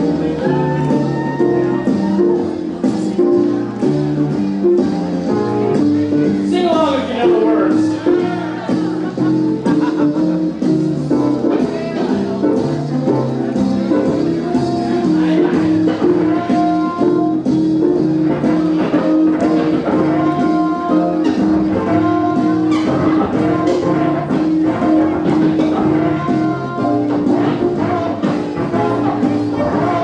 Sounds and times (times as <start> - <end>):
Musical instrument: 0.0 - 30.0.